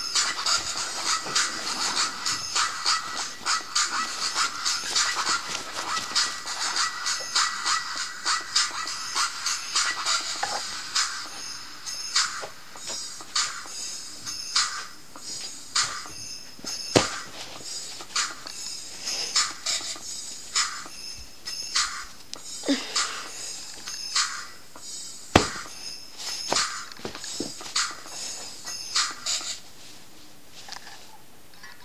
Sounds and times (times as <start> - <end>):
Music: 0.0 - 29.7.